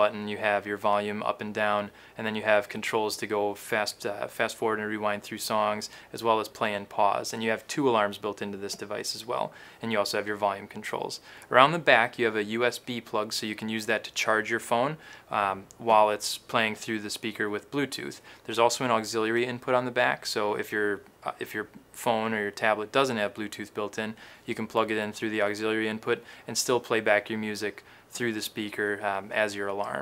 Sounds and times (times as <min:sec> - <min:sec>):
Speech: 0:00.0 - 0:30.0.